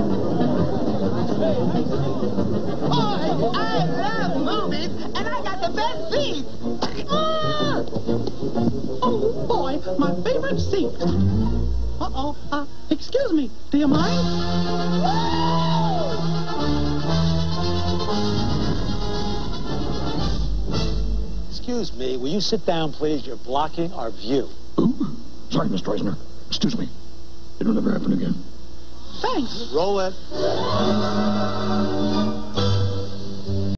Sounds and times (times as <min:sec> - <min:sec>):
Music: 0:00.0 - 0:12.8, 0:13.8 - 0:22.2, 0:29.5 - 0:33.7.